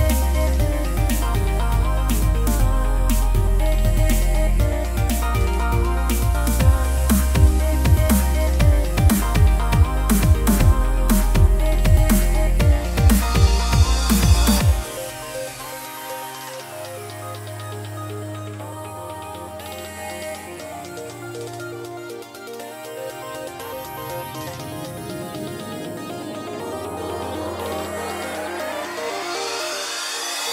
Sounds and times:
Dubstep: 0.0s - 30.5s.

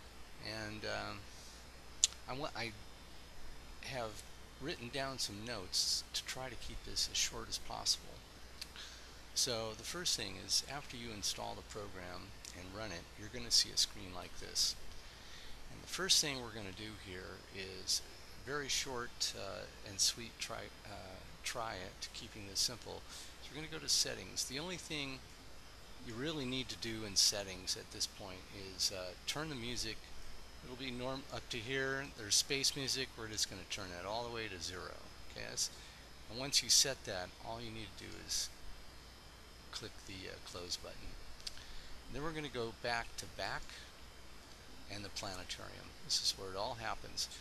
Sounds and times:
Speech: 0.4s - 1.3s, 2.0s - 2.8s, 3.8s - 8.2s, 9.4s - 14.8s, 15.7s - 25.2s, 26.0s - 30.0s, 30.6s - 38.6s, 39.7s - 41.2s, 42.1s - 44.0s, 44.9s - 47.4s.

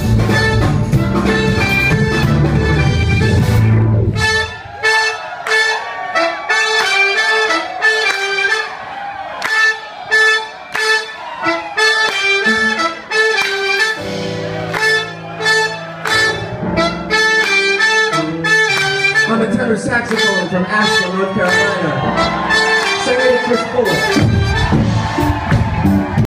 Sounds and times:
Inside, large room or hall: 0.0s - 26.2s
Inside, public space: 0.0s - 26.2s
Music: 0.0s - 26.2s
Speech: 19.3s - 22.0s, 23.0s - 24.2s.

